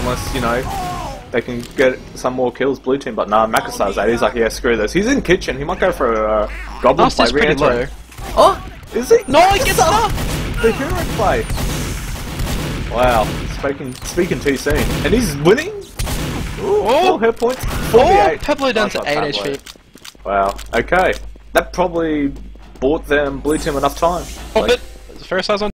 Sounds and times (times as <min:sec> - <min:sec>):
Speech: 0:01.4 - 0:11.4, 0:16.6 - 0:19.6.